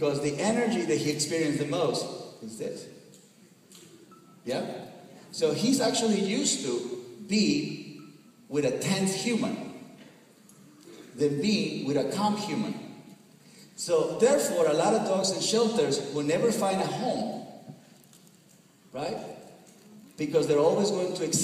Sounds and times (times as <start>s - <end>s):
Speech: 0.0s - 2.9s, 4.5s - 7.7s, 8.5s - 9.6s, 11.2s - 12.8s, 13.8s - 17.4s, 19.0s - 19.3s, 20.2s - 21.4s.